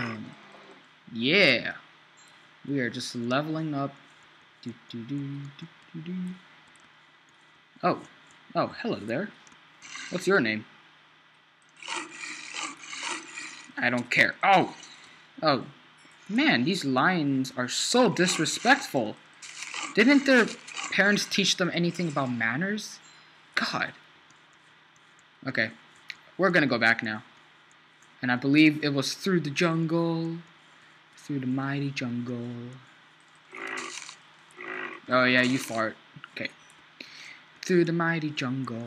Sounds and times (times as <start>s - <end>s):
Speech: 0.0s - 0.4s, 1.1s - 1.8s, 2.7s - 4.0s, 4.6s - 6.4s, 7.8s - 9.4s, 10.2s - 10.7s, 13.8s - 14.8s, 15.4s - 15.7s, 16.3s - 19.2s, 20.0s - 23.0s, 23.6s - 24.0s, 25.4s - 25.8s, 26.4s - 27.3s, 28.2s - 30.5s, 31.2s - 32.8s, 35.1s - 36.6s, 37.6s - 38.8s.